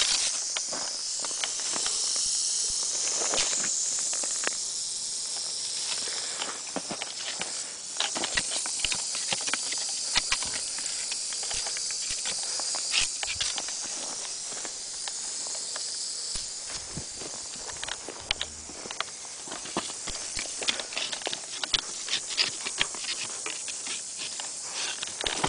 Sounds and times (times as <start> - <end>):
Hiss: 0.0 - 25.4.